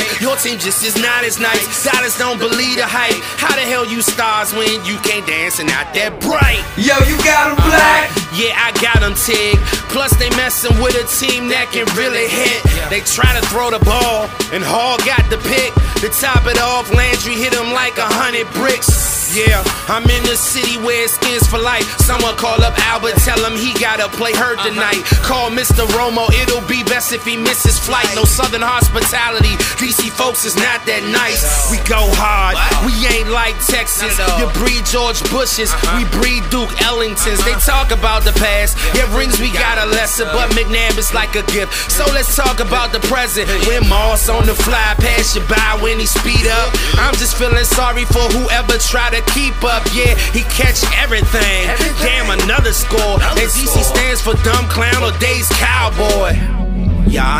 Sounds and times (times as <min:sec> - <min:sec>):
Music: 0:00.0 - 0:57.4.